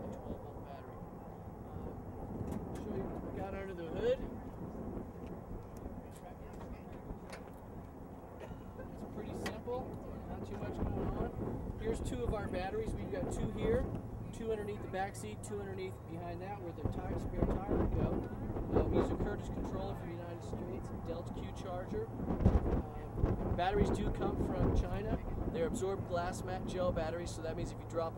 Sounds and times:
Speech: 0.0 - 1.0, 2.8 - 4.3, 6.0 - 7.1, 8.9 - 22.1, 22.8 - 28.1.

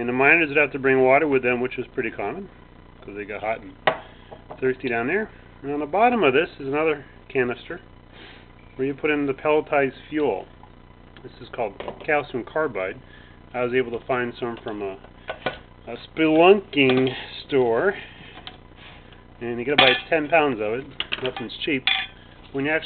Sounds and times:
Speech: 0.0 - 3.8, 4.6 - 7.9, 8.8 - 10.5, 11.2 - 13.0, 13.6 - 15.0, 15.9 - 18.0, 19.4 - 21.9, 22.5 - 22.8.

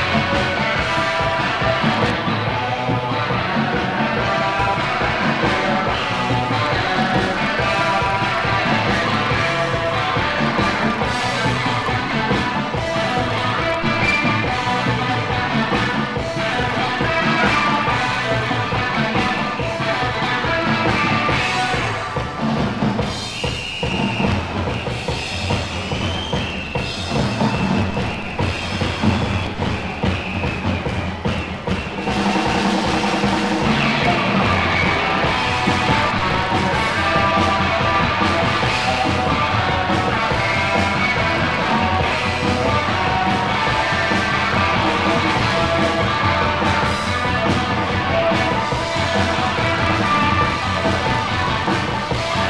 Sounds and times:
Rock and roll: 0.0 - 52.5.

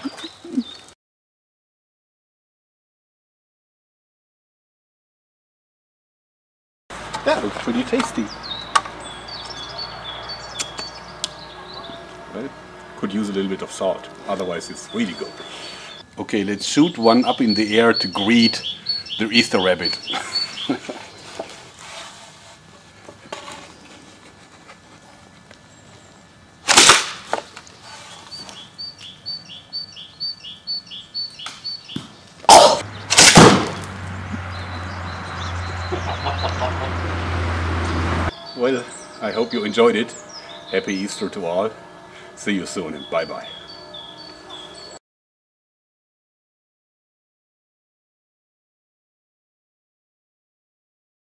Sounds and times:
Speech: 7.2 - 8.3, 11.6 - 15.4, 16.2 - 18.6, 19.2 - 20.1, 38.6 - 41.8, 42.4 - 43.5.

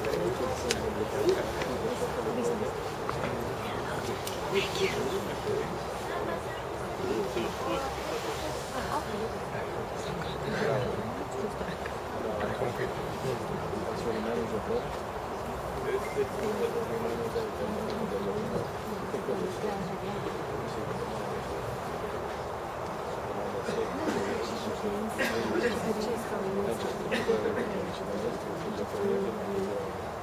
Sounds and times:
Speech: 0.0 - 15.0, 23.1 - 30.2.

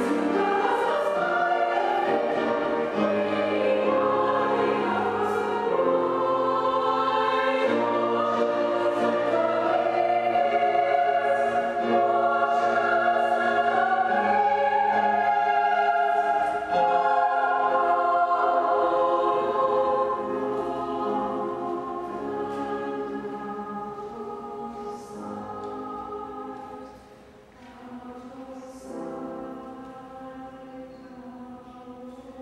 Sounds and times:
Choir: 0.0 - 32.4.

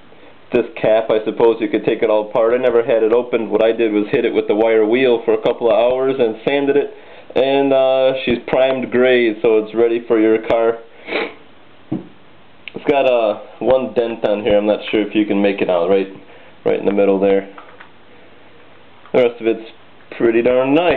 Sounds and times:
Speech: 0.5 - 10.9, 12.7 - 17.6, 19.1 - 20.9.

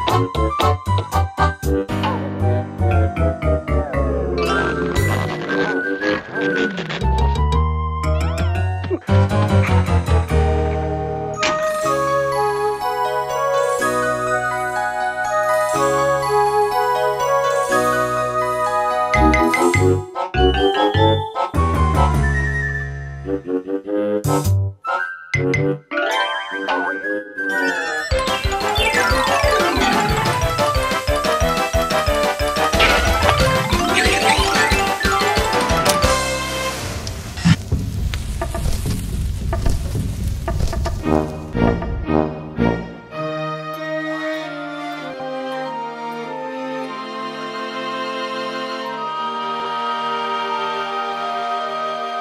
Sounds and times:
Music: 0.0 - 52.2.

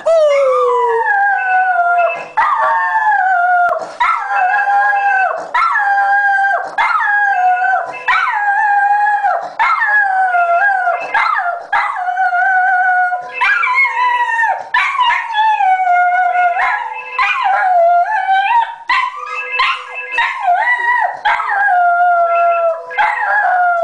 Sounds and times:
Howl: 0.0 - 23.8.

